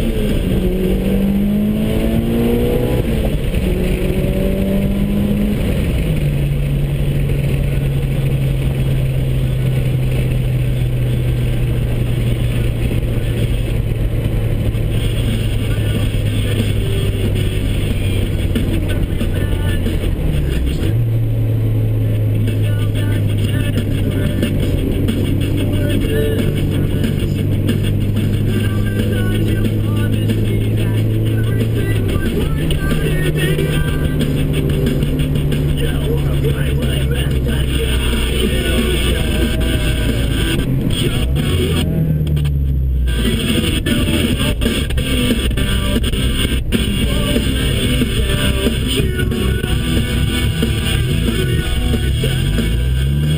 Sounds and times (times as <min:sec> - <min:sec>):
Music: 0:00.0 - 0:06.1, 0:07.4 - 0:21.1, 0:22.1 - 0:53.3.